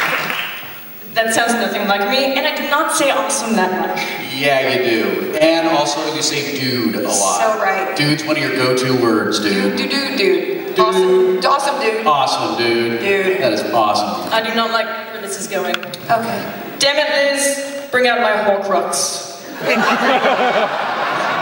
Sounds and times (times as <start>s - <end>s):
Speech: 1.2s - 19.2s.